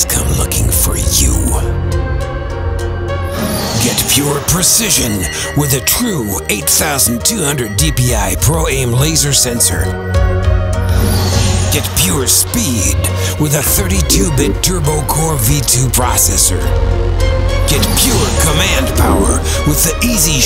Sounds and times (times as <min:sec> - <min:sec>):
Speech: 0:00.0 - 0:01.7, 0:03.8 - 0:09.9, 0:11.7 - 0:16.7, 0:17.7 - 0:20.4
Music: 0:00.0 - 0:20.4.